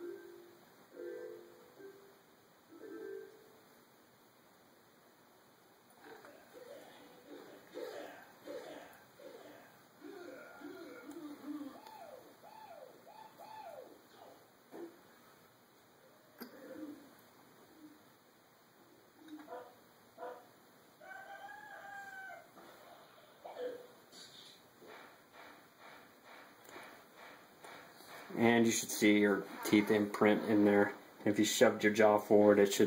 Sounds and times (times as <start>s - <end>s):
Bark: 19.5s - 20.5s.